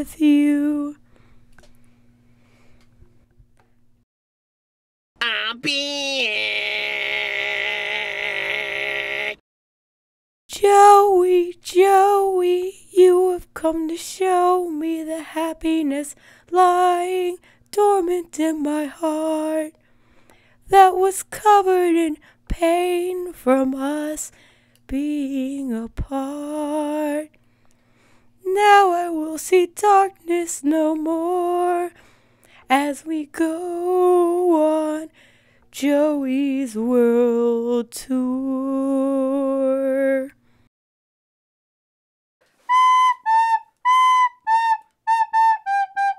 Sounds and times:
Speech: 0:05.2 - 0:08.7.

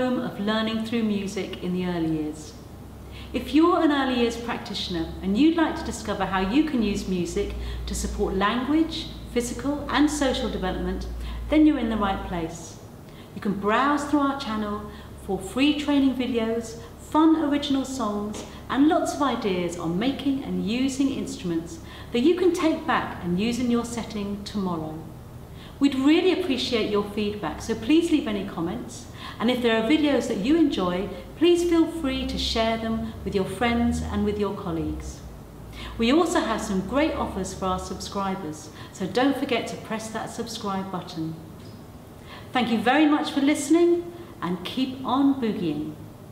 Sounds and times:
Speech: 0:00.0 - 0:02.6, 0:03.3 - 0:12.8, 0:13.4 - 0:25.1, 0:25.8 - 0:35.3, 0:35.9 - 0:41.5, 0:42.5 - 0:46.0.

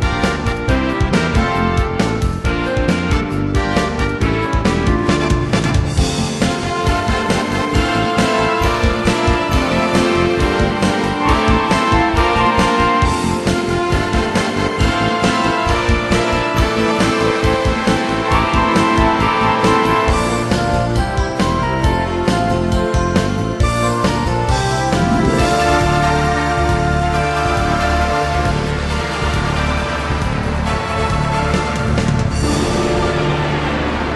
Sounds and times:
Music: 0:00.0 - 0:34.1.

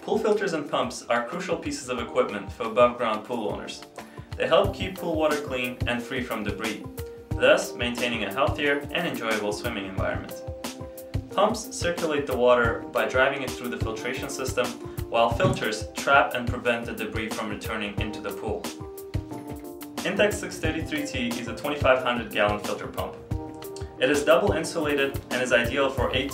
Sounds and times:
Speech: 0:00.0 - 0:10.4, 0:11.3 - 0:18.8, 0:20.0 - 0:23.2, 0:24.0 - 0:26.3
Music: 0:00.0 - 0:26.3.

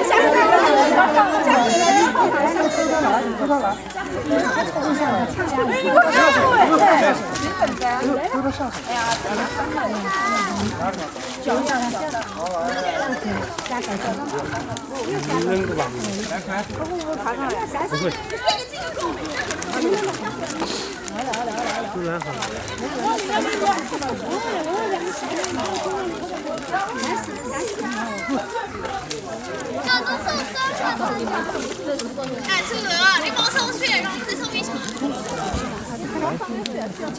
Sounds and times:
Speech: 0:00.0 - 0:37.1.

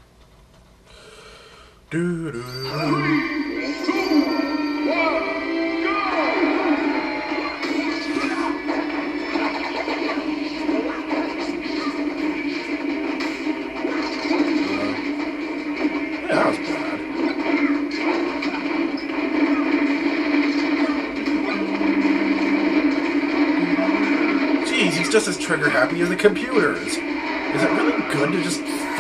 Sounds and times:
Speech: 0:01.9 - 0:03.3, 0:16.3 - 0:17.0, 0:24.7 - 0:27.0, 0:27.6 - 0:29.0.

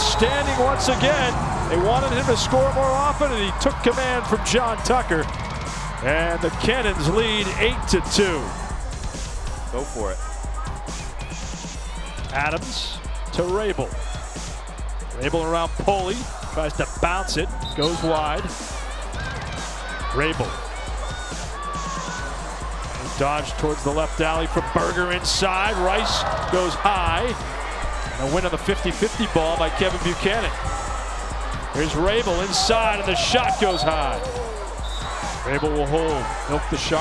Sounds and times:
Speech: 0:00.0 - 0:05.2, 0:06.0 - 0:08.5, 0:12.3 - 0:13.9, 0:15.2 - 0:18.5, 0:23.1 - 0:27.4, 0:28.2 - 0:30.5, 0:31.8 - 0:34.3, 0:35.4 - 0:37.0
Music: 0:00.0 - 0:37.0.

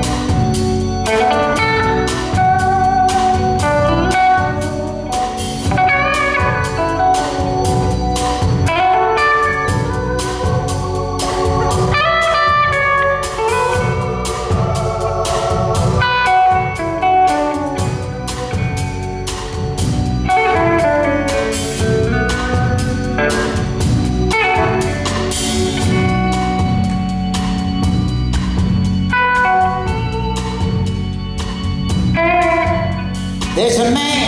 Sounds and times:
Guitar: 0:00.0 - 0:34.2.

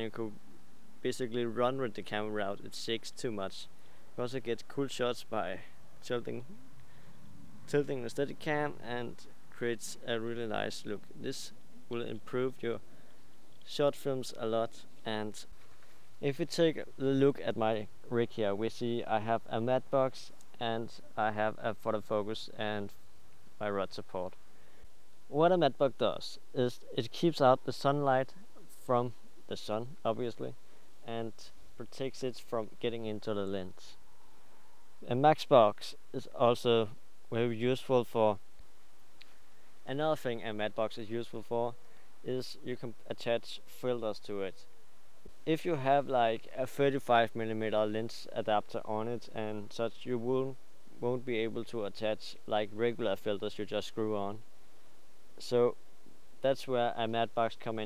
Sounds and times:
Speech: 0:00.0 - 0:00.4, 0:01.0 - 0:06.5, 0:07.7 - 0:12.9, 0:13.6 - 0:15.5, 0:16.2 - 0:23.0, 0:23.6 - 0:24.4, 0:25.3 - 0:34.0, 0:35.0 - 0:38.4, 0:39.9 - 0:44.7, 0:45.4 - 0:54.4, 0:55.4 - 0:55.8, 0:56.4 - 0:57.8.

